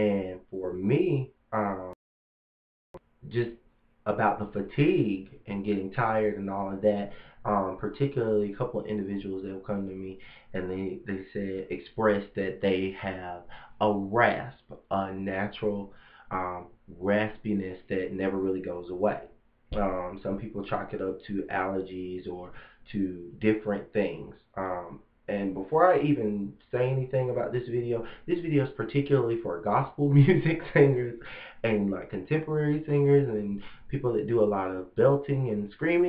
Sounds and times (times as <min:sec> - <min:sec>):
Speech: 0:00.0 - 0:02.0, 0:03.2 - 0:36.0.